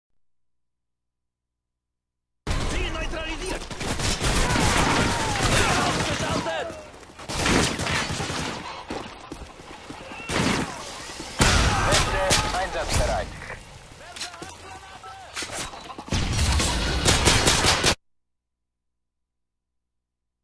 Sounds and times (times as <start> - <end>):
Fusillade: 2.5 - 8.8, 16.1 - 18.0
Speech: 2.6 - 3.6, 5.1 - 6.9, 11.6 - 15.4.